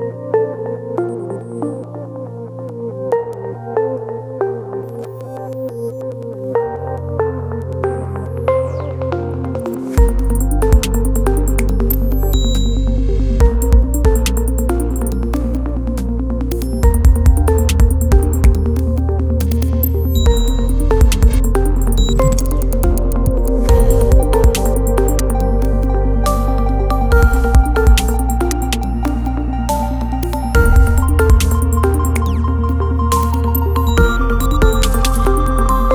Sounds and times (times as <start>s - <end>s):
Music: 0.0s - 35.9s.